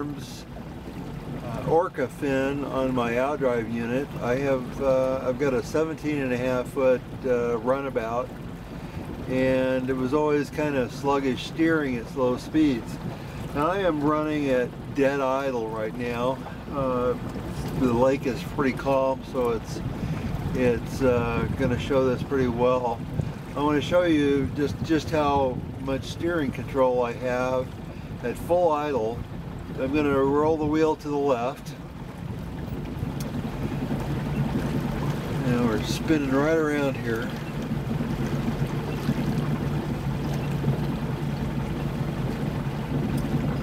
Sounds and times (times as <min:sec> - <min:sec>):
Motorboat, speedboat: 0:00.0 - 0:43.6.